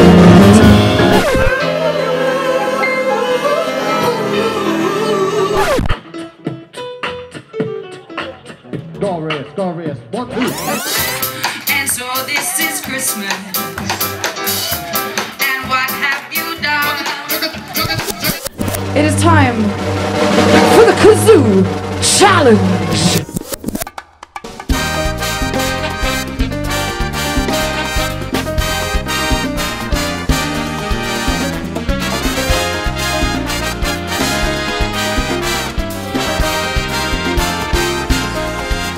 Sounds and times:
Singing: 1.5 - 5.8
Beatboxing: 5.4 - 18.6.

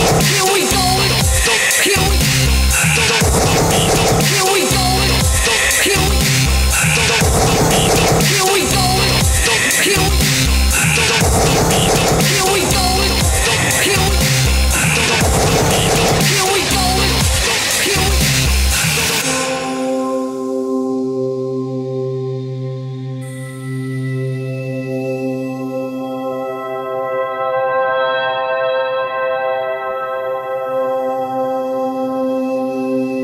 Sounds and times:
Ambient music: 0.0 - 33.2.

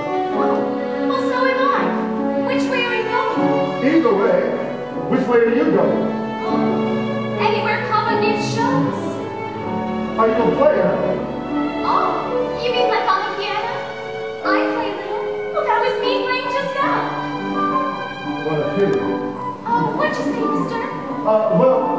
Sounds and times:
Music: 0.0 - 21.9.

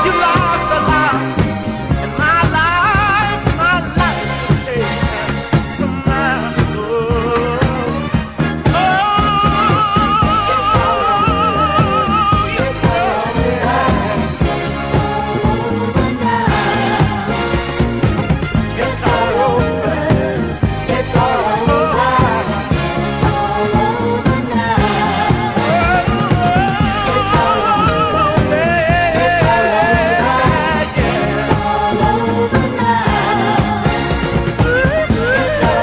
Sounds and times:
Pop music: 0.0 - 35.8
Soul music: 0.0 - 35.8.

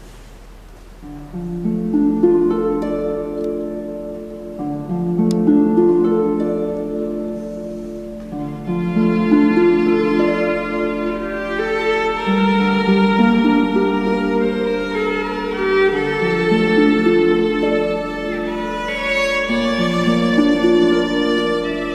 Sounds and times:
Violin, fiddle: 8.2 - 21.9.

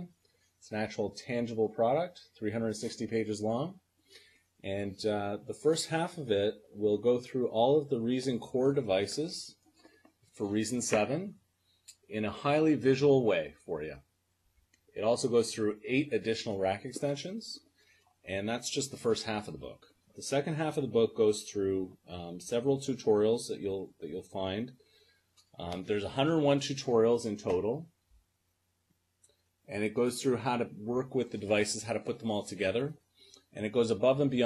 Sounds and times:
Speech: 0.7 - 3.8, 4.7 - 9.6, 10.4 - 11.4, 12.0 - 14.1, 15.0 - 17.6, 18.3 - 24.8, 25.6 - 27.9, 29.7 - 33.0, 33.6 - 34.4.

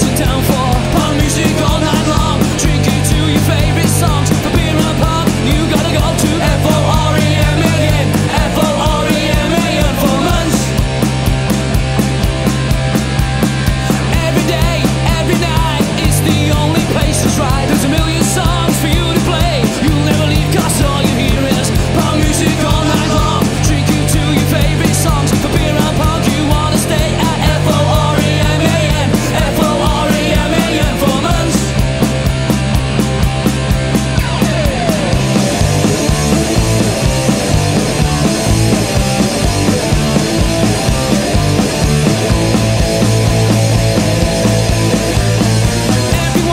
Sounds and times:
Punk rock: 0.0 - 46.5.

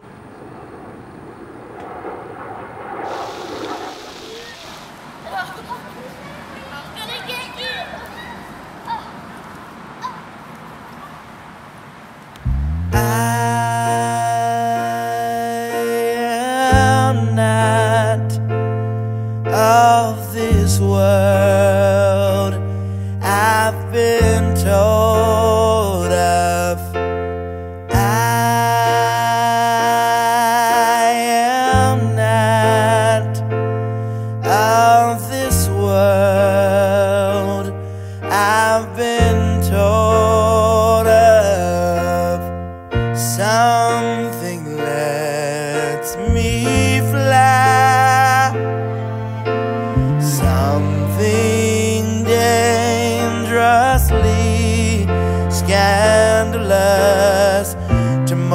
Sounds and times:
Music: 12.9 - 31.0, 31.7 - 58.5.

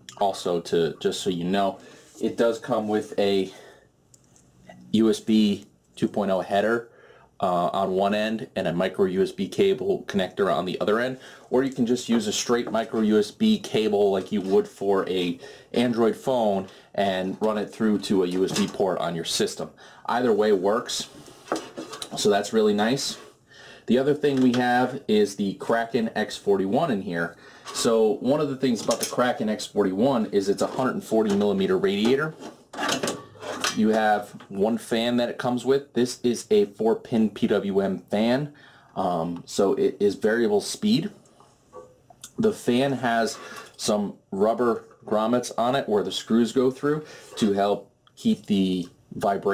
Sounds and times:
Speech: 0.0 - 3.7, 4.7 - 21.2, 22.0 - 23.3, 23.9 - 32.4, 33.6 - 41.2, 42.2 - 49.5.

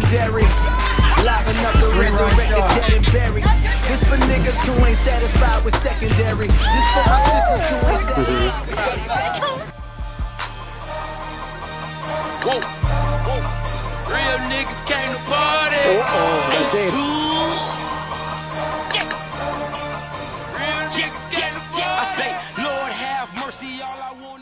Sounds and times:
Music: 0.0 - 24.4
Speech: 15.8 - 17.6.

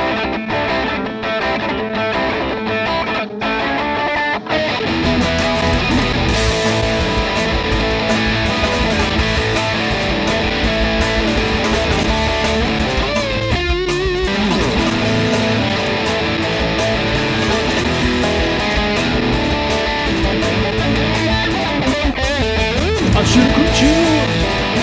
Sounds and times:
Bass guitar: 4.6 - 24.8.

